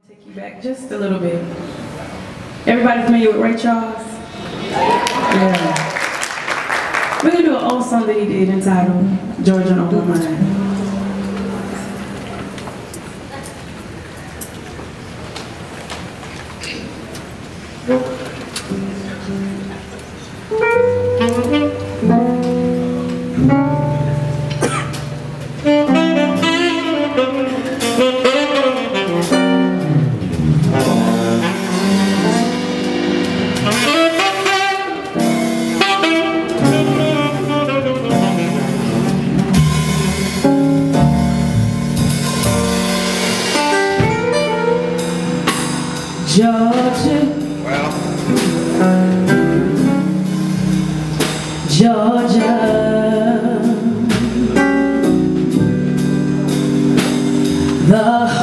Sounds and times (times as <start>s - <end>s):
Music: 1.2s - 13.0s, 17.9s - 58.4s.